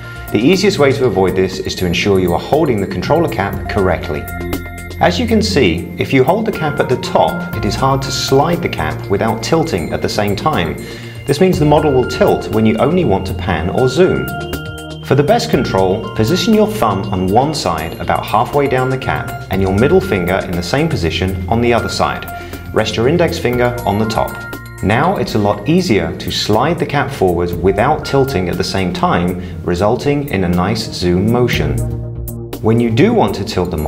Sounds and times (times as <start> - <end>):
Music: 0.0 - 33.8
Speech: 0.3 - 4.3, 5.0 - 14.3, 15.1 - 31.9, 32.6 - 33.8.